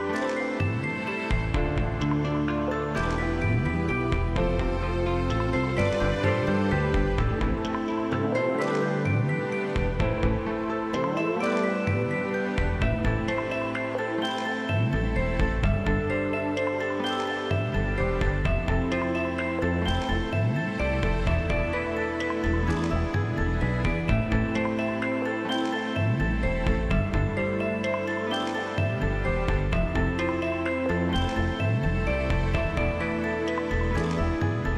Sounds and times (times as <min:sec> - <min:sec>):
Soundtrack music: 0:00.0 - 0:34.7.